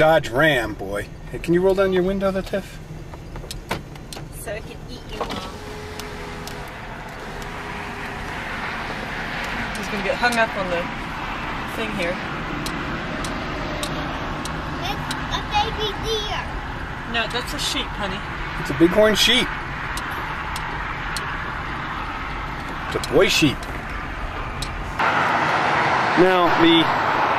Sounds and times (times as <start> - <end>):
Speech: 26.2 - 26.9.